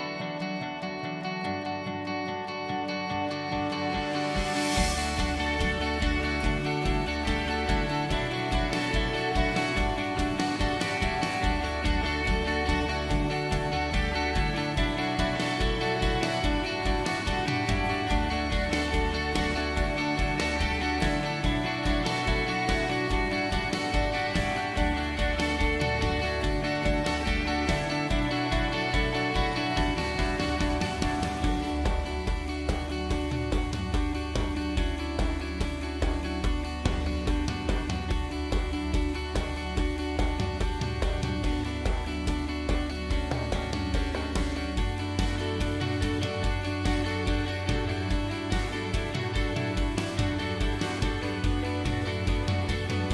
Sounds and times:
Music: 0:00.0 - 0:53.1.

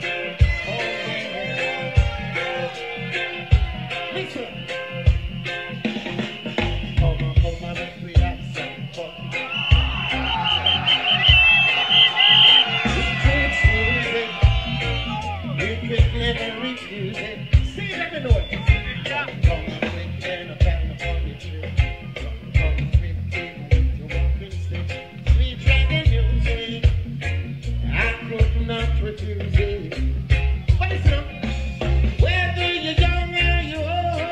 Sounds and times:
Music: 0:00.0 - 0:34.3.

